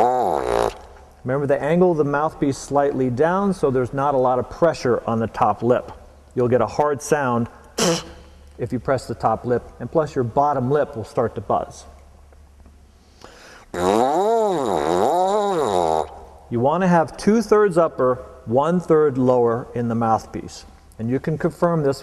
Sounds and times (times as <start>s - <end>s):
Speech: 1.2s - 8.0s, 8.6s - 12.0s, 16.5s - 22.0s.